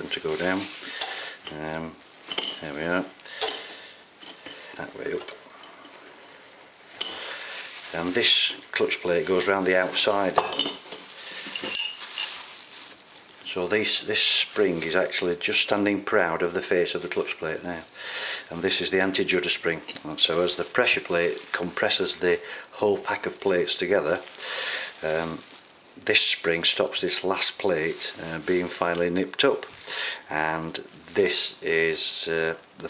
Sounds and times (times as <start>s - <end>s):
Speech: 0.0s - 0.8s, 1.5s - 2.0s, 2.6s - 3.2s, 4.8s - 5.3s, 7.9s - 10.6s, 13.5s - 17.9s, 18.5s - 24.3s, 25.0s - 29.7s, 30.3s - 32.8s.